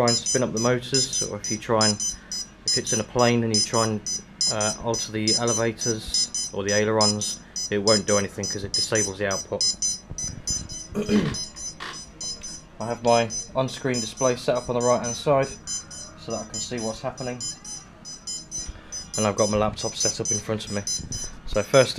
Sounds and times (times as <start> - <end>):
Smoke detector, smoke alarm: 0.0 - 21.5.